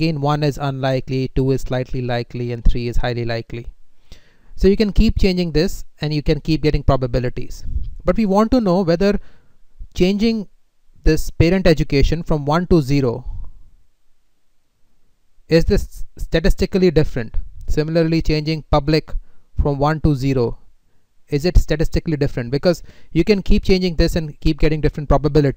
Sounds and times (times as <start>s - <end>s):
Speech: 0.0s - 3.7s, 4.6s - 9.2s, 10.0s - 13.4s, 15.5s - 20.6s, 21.3s - 25.5s.